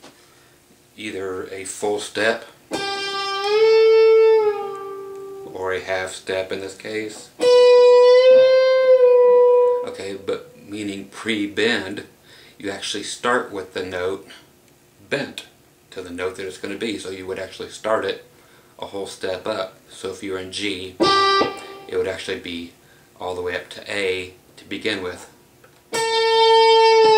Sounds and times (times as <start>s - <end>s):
Speech: 1.0s - 2.6s, 5.4s - 7.4s, 9.8s - 21.0s, 21.9s - 25.4s
Guitar: 1.3s - 12.0s, 16.2s - 22.6s, 23.4s - 27.1s.